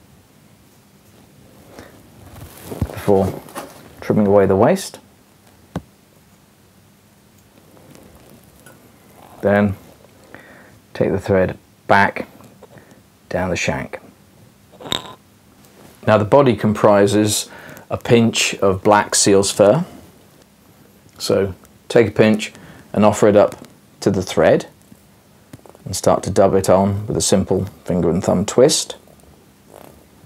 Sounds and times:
Inside, small room: 0:00.0 - 0:30.2
Speech: 0:02.9 - 0:03.4, 0:04.0 - 0:05.1, 0:09.4 - 0:09.8, 0:10.9 - 0:12.3, 0:13.3 - 0:14.1, 0:16.0 - 0:20.0, 0:21.2 - 0:24.8, 0:25.8 - 0:29.0.

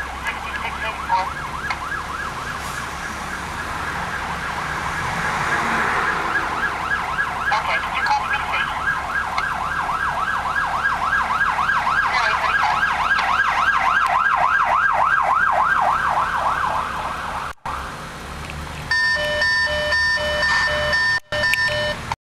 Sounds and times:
Vehicle: 0:00.0 - 0:22.2
Medium engine (mid frequency): 0:14.7 - 0:22.2.

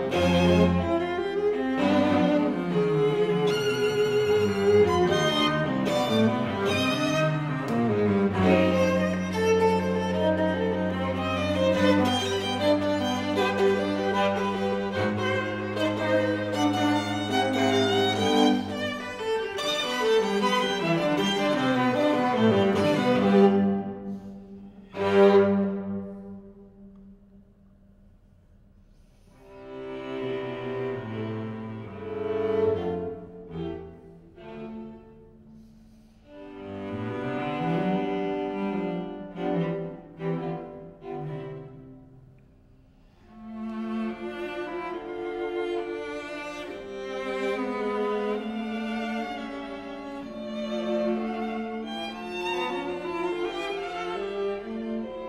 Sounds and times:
Cello: 0:00.0 - 0:55.2.

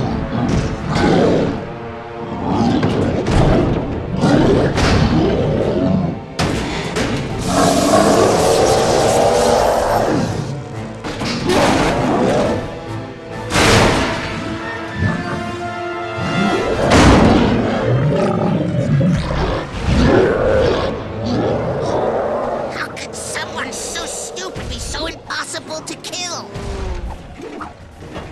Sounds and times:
Speech: 0:22.7 - 0:26.6.

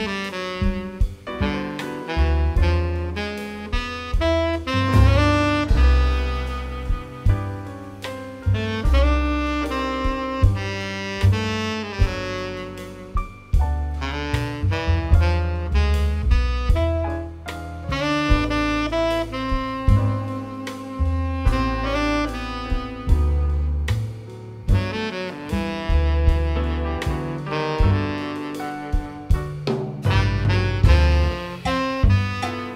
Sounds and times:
Brass instrument: 0:00.0 - 0:32.7
Saxophone: 0:00.0 - 0:32.7.

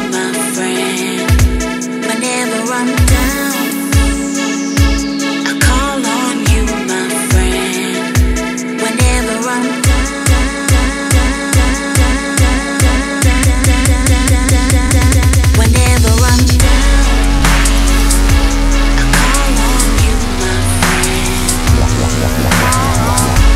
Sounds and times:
Dubstep: 0:00.0 - 0:23.5.

